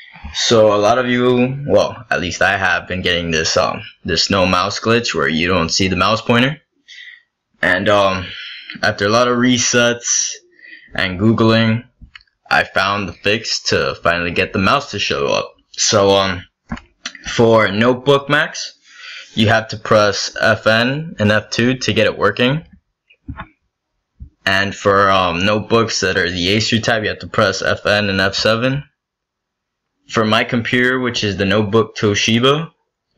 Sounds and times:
Speech: 0.0s - 16.5s, 17.1s - 22.7s, 24.3s - 29.0s, 30.1s - 32.8s.

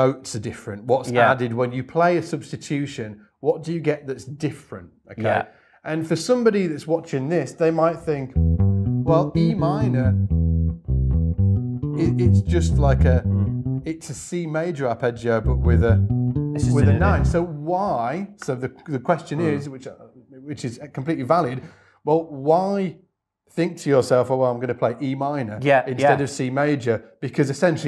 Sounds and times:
Speech: 0.0s - 8.3s, 9.1s - 10.2s, 12.0s - 16.0s, 16.6s - 27.8s
Bass guitar: 8.0s - 14.1s, 15.2s - 18.1s.

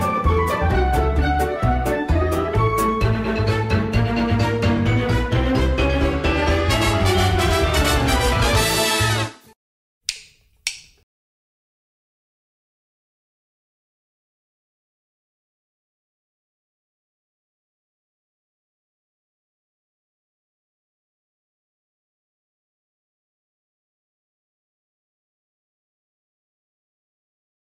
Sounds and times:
Music: 0.0s - 9.6s.

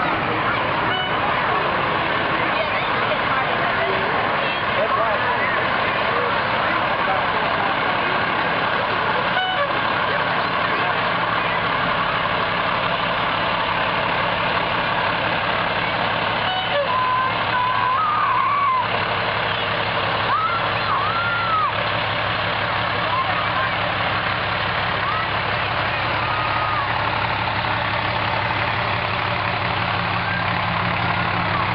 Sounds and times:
Truck: 0.0s - 31.7s.

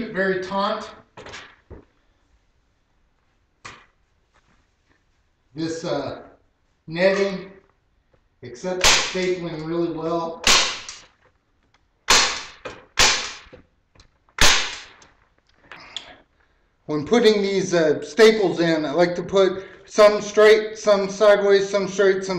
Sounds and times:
Speech: 0.0s - 1.0s, 5.6s - 7.6s, 8.4s - 10.4s, 16.9s - 22.3s.

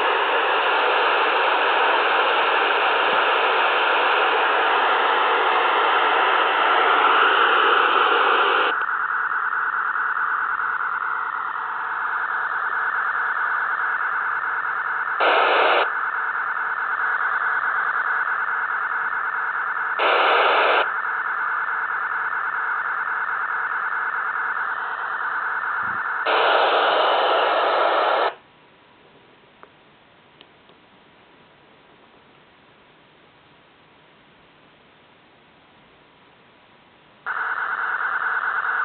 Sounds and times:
Radio: 0.0s - 28.4s, 37.3s - 38.8s.

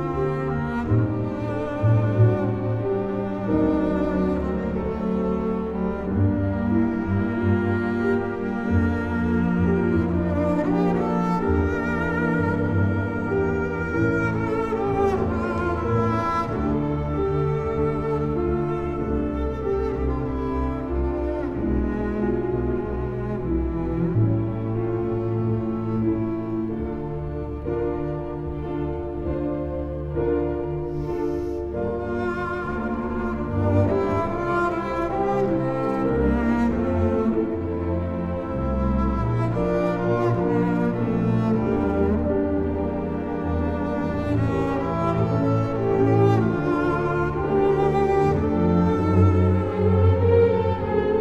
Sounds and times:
Cello: 0.0s - 51.2s
Double bass: 0.0s - 51.2s.

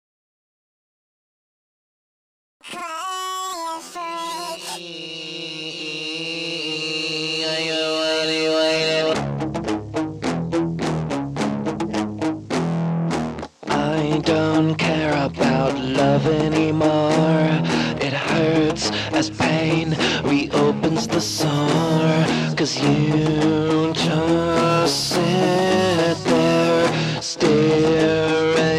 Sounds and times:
Music: 7.3s - 28.7s.

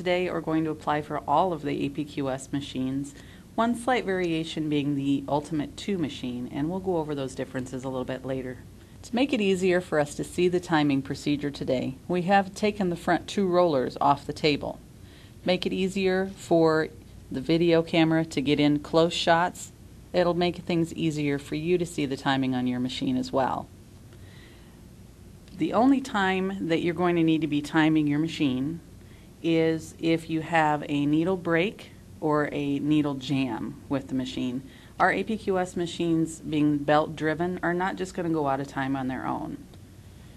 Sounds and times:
Speech: 0.0s - 14.8s, 15.4s - 23.7s, 25.5s - 28.8s, 29.4s - 39.8s.

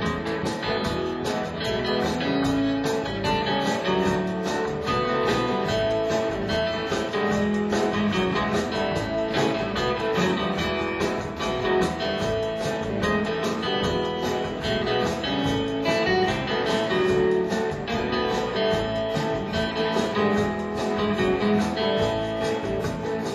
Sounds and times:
Music: 0.0s - 23.3s.

